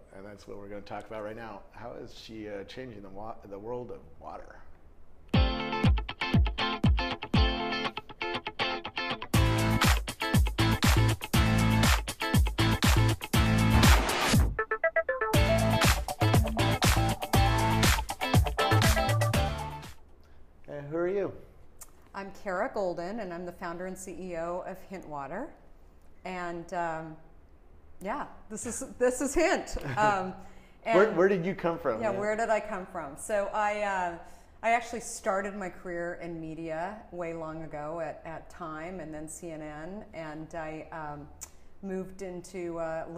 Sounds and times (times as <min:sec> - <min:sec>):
Music: 0:05.3 - 0:20.0.